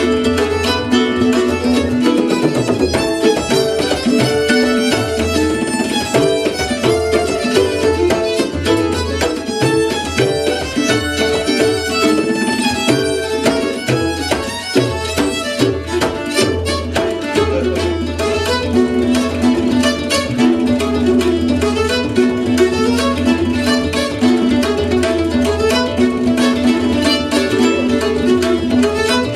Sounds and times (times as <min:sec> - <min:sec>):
Bowed string instrument: 0:00.0 - 0:29.3
Guitar: 0:00.0 - 0:29.3
Tabla: 0:00.0 - 0:29.3.